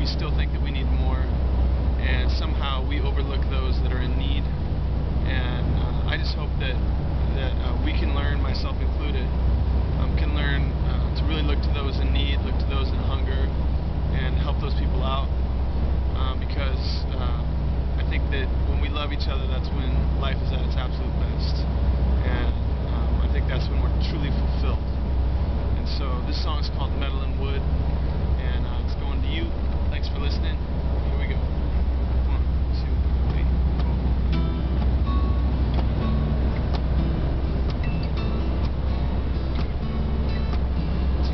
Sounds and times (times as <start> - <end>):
Speech: 0.0 - 1.3, 2.0 - 4.5, 5.2 - 9.4, 10.0 - 15.3, 16.1 - 24.9, 25.8 - 27.7, 28.4 - 31.4, 32.2 - 34.0.